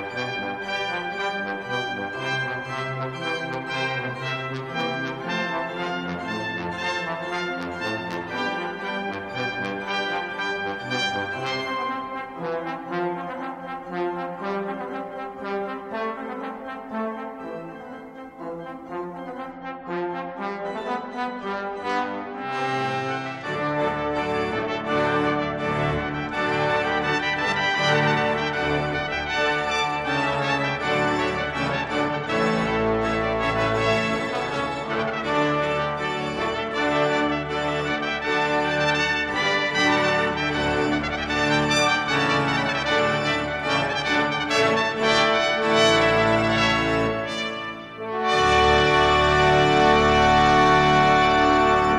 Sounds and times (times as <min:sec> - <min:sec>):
Trombone: 0:00.0 - 0:51.9
Trumpet: 0:00.0 - 0:51.9.